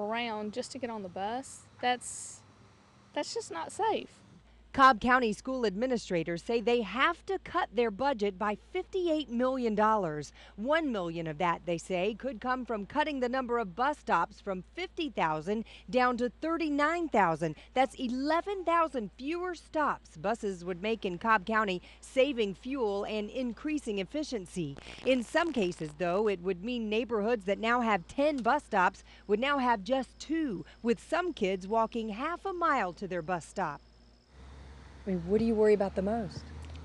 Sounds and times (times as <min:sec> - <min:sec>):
Speech: 0:03.2 - 0:04.1, 0:35.1 - 0:36.4.